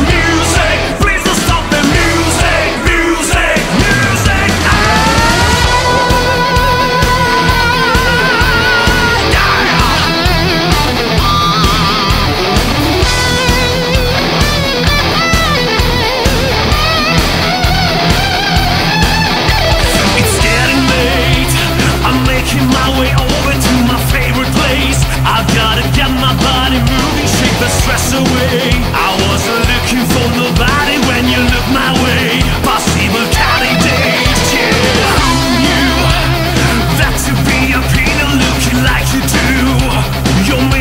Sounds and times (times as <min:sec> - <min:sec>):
Music: 0:00.0 - 0:40.8.